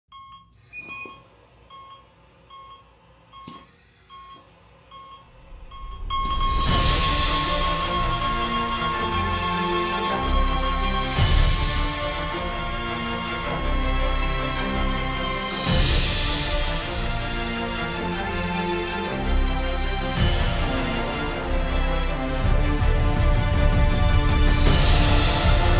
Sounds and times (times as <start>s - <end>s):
Music: 5.5s - 25.7s.